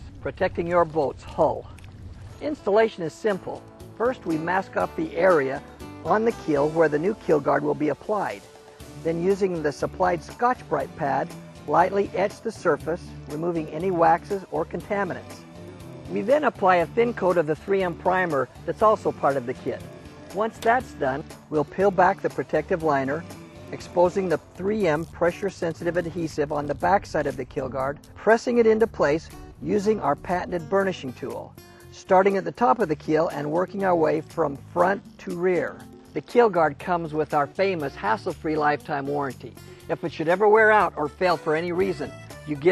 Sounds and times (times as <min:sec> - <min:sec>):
Speech: 0:00.0 - 0:01.8, 0:02.4 - 0:08.4, 0:09.0 - 0:15.4, 0:16.1 - 0:19.8, 0:20.4 - 0:23.2, 0:23.8 - 0:42.7
Music: 0:00.0 - 0:42.7.